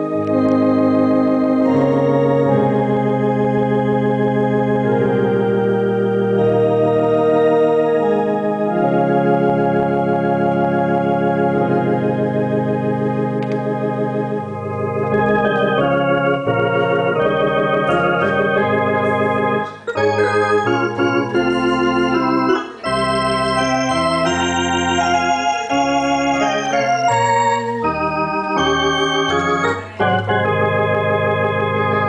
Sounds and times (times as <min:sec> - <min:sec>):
Electronic organ: 0:00.0 - 0:32.0.